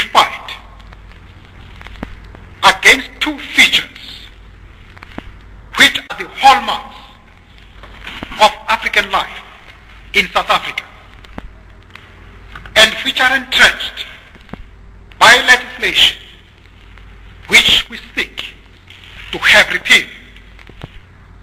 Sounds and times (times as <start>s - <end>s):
Male speech, man speaking: 0.0s - 0.7s, 2.6s - 4.3s, 5.8s - 7.2s, 8.3s - 9.5s, 10.1s - 11.0s, 12.8s - 14.2s, 15.2s - 16.4s, 17.5s - 18.6s, 19.3s - 20.3s
Narration, monologue: 0.0s - 21.4s.